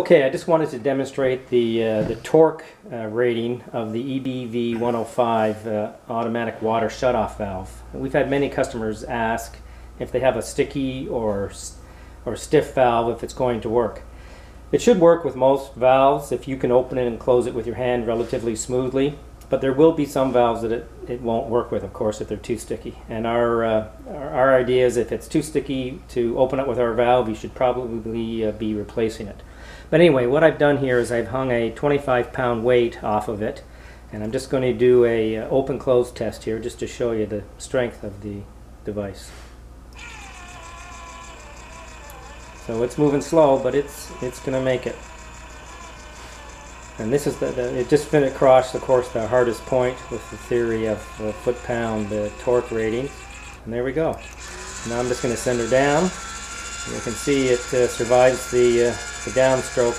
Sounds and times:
Speech: 0:00.0 - 0:14.1, 0:14.7 - 0:39.4, 0:42.6 - 0:45.1, 0:47.0 - 0:56.2, 0:56.8 - 0:59.9.

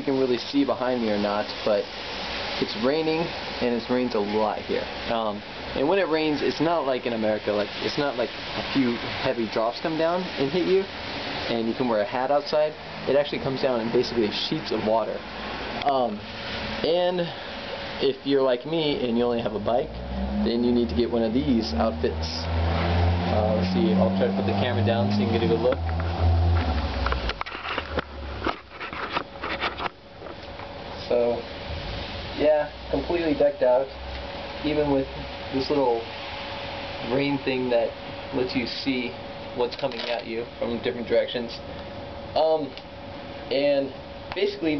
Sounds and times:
Speech: 0:00.0 - 0:01.9, 0:02.6 - 0:10.9, 0:11.5 - 0:15.2, 0:15.8 - 0:16.2, 0:16.8 - 0:17.4, 0:18.0 - 0:22.5, 0:23.3 - 0:25.8, 0:31.0 - 0:31.5, 0:32.4 - 0:34.0, 0:34.6 - 0:36.1, 0:37.0 - 0:41.6, 0:42.4 - 0:42.8, 0:43.5 - 0:44.7
Rain on surface: 0:00.0 - 0:28.6, 0:30.2 - 0:41.9.

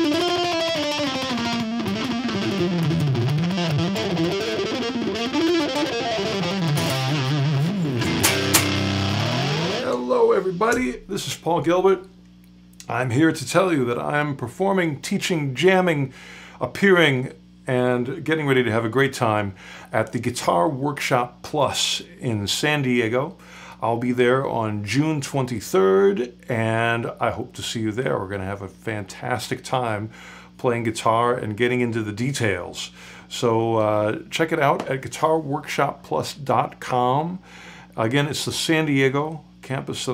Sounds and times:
Speech: 0:09.8 - 0:12.1, 0:12.8 - 0:37.4, 0:38.0 - 0:40.1.

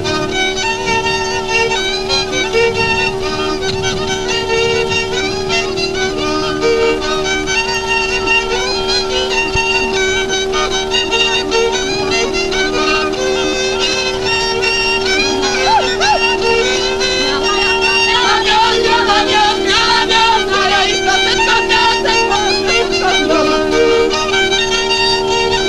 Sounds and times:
Bagpipes: 0:00.0 - 0:25.6
Wind instrument, woodwind instrument: 0:00.0 - 0:25.6.

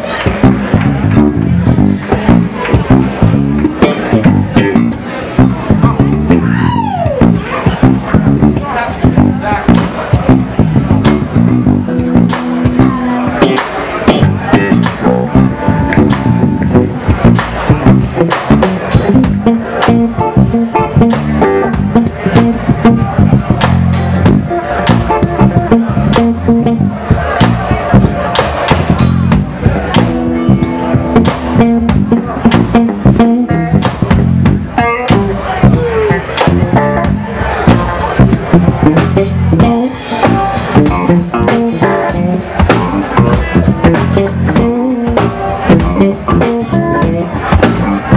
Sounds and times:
Music: 0:00.0 - 0:48.1.

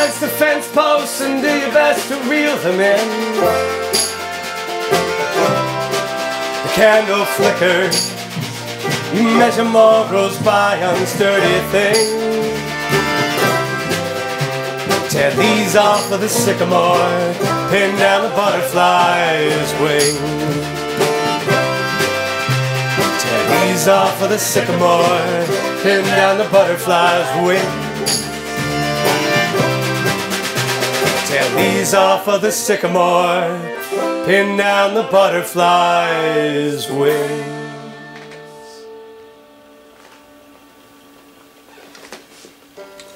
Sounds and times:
Banjo: 0:00.0 - 0:39.2.

